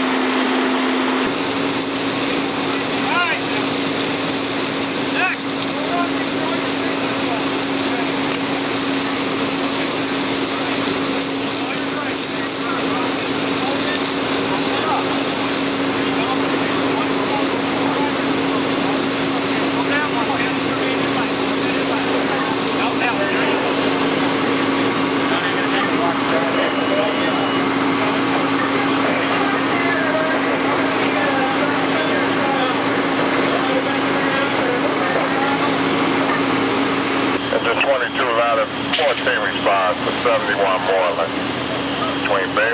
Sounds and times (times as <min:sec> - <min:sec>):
Truck: 0:00.0 - 0:42.7
Speech: 0:02.7 - 0:03.7, 0:05.1 - 0:08.6, 0:10.4 - 0:15.3, 0:15.9 - 0:23.8, 0:25.2 - 0:36.6, 0:37.5 - 0:42.7.